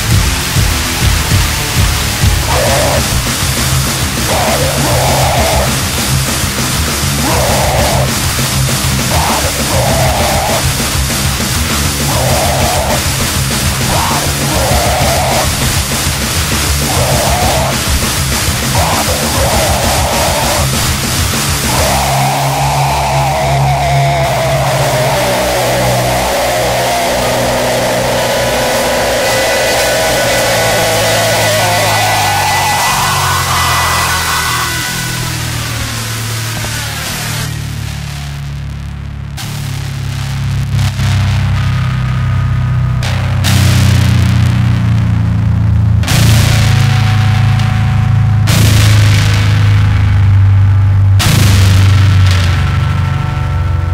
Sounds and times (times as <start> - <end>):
Hum: 0.0 - 53.9.